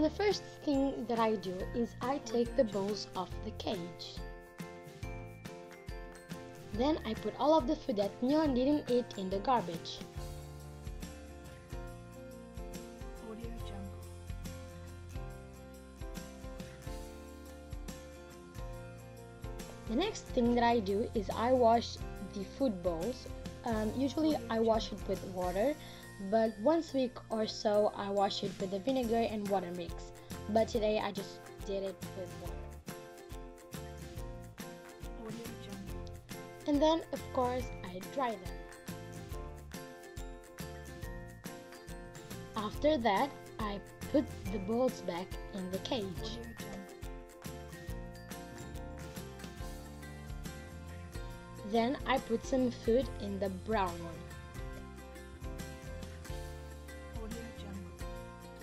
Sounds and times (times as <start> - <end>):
Speech: 0.0 - 4.2, 6.8 - 10.1, 13.2 - 13.9, 19.9 - 32.6, 35.2 - 36.0, 36.7 - 38.5, 42.6 - 46.9, 51.7 - 54.3, 57.2 - 58.0
Music: 0.0 - 58.6.